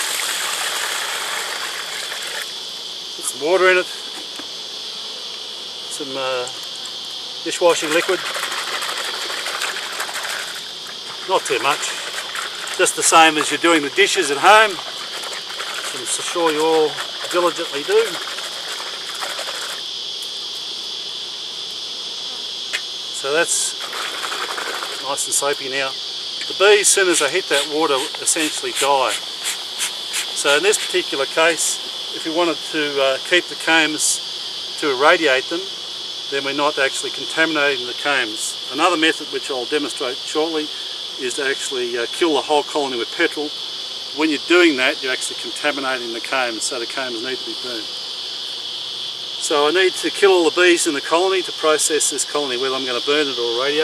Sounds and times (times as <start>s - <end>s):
Cricket: 0.0s - 53.8s.